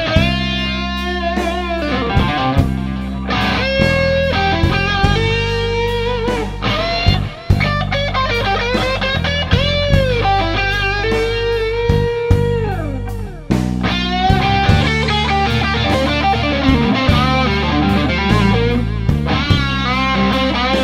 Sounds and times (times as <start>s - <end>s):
Blues: 0.0s - 20.8s
Electric guitar: 0.0s - 20.8s
Strum: 0.0s - 20.8s.